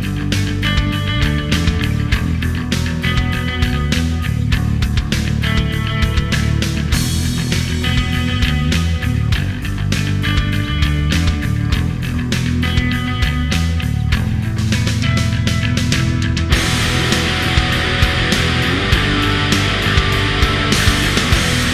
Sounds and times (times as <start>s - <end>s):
Progressive rock: 0.0s - 21.7s.